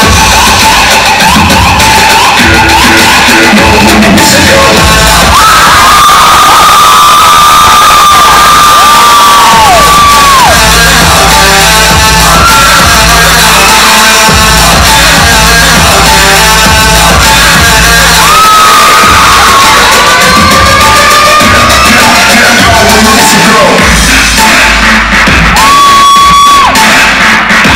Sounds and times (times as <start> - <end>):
Music: 0.0 - 27.7.